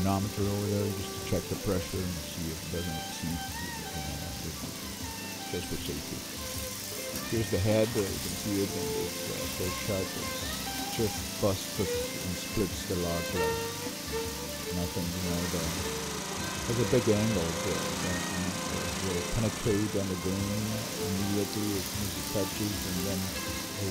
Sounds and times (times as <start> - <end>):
Speech: 0.0 - 4.7, 5.5 - 6.3, 7.3 - 10.3, 10.9 - 13.5, 14.7 - 15.9, 16.6 - 23.9
Music: 0.0 - 23.9.